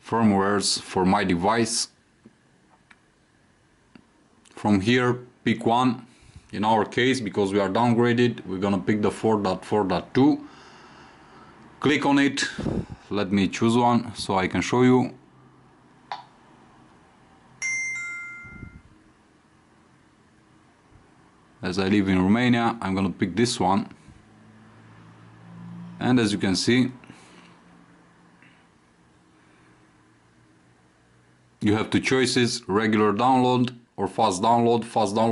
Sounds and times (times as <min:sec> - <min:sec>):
Speech: 0:00.0 - 0:02.0, 0:04.5 - 0:10.5, 0:11.8 - 0:15.2, 0:21.6 - 0:24.0, 0:26.0 - 0:27.0, 0:31.6 - 0:35.3
Inside, small room: 0:00.0 - 0:35.3.